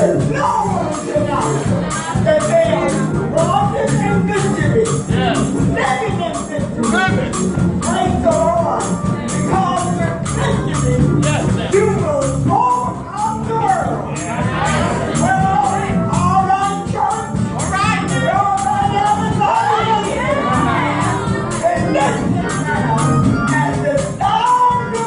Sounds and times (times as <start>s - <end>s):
Music: 0.0s - 25.0s
Speech: 0.0s - 25.0s.